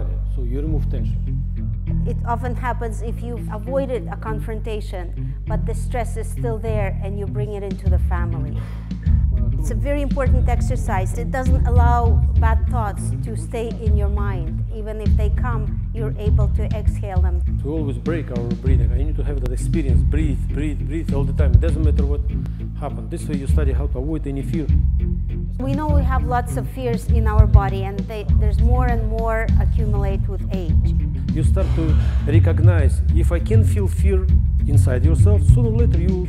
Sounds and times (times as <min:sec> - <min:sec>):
Speech: 0:00.0 - 0:01.2, 0:02.1 - 0:08.6, 0:09.4 - 0:24.8, 0:25.6 - 0:36.2
Music: 0:00.0 - 0:36.2.